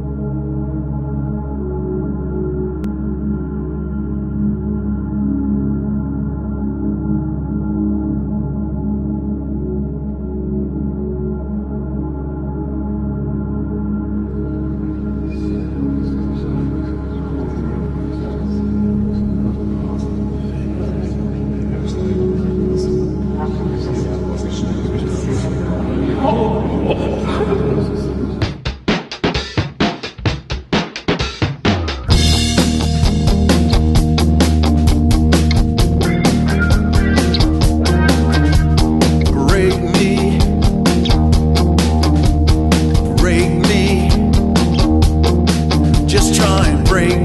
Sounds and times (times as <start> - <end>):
Angry music: 0.0 - 47.2.